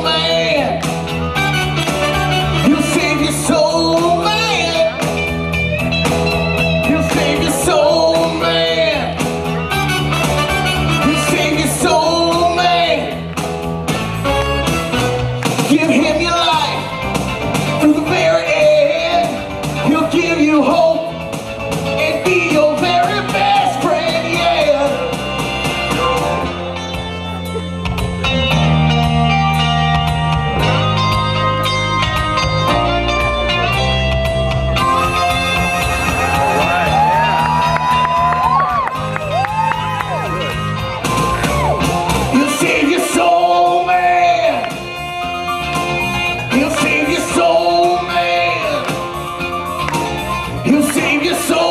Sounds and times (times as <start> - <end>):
Blues: 0.0 - 51.7.